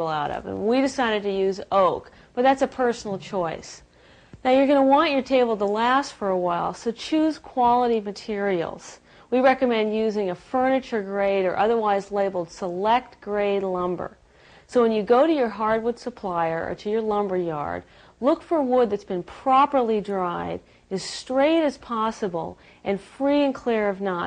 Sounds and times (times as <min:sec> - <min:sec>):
Speech: 0:00.0 - 0:24.2.